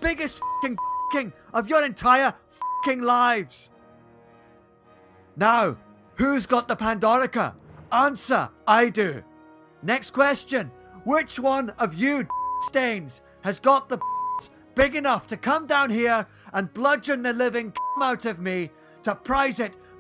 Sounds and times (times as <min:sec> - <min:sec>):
Male speech, man speaking: 0:00.0 - 0:03.7, 0:05.4 - 0:09.2, 0:09.8 - 0:19.8
Speech synthesizer: 0:00.0 - 0:03.7, 0:09.9 - 0:14.0, 0:14.8 - 0:19.8.